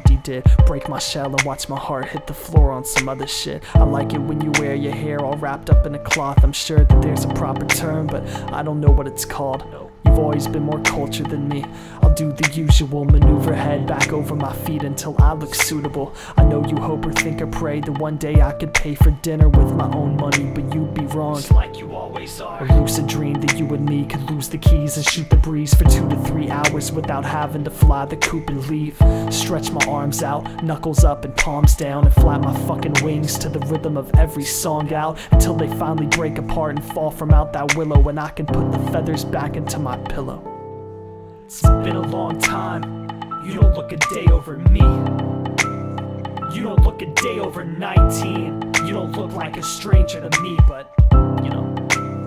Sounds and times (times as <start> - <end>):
Music: 0.0 - 52.2.